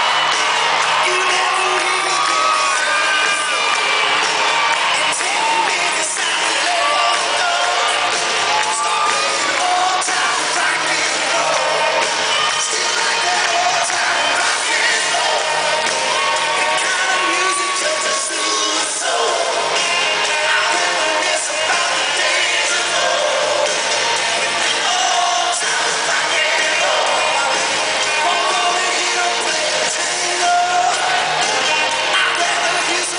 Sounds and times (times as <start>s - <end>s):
Rock and roll: 0.0s - 33.1s.